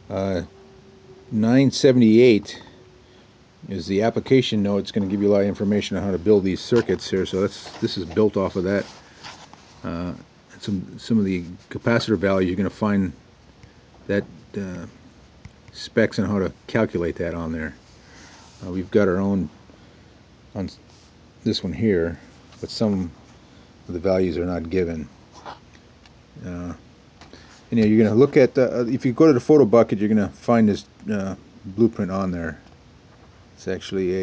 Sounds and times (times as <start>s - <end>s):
Speech: 0.1s - 0.5s, 1.3s - 2.8s, 3.6s - 8.9s, 9.8s - 13.2s, 14.1s - 15.0s, 15.7s - 17.8s, 18.6s - 19.5s, 20.6s - 20.8s, 21.4s - 23.2s, 23.9s - 25.1s, 26.4s - 26.8s, 27.7s - 32.7s, 33.6s - 34.2s.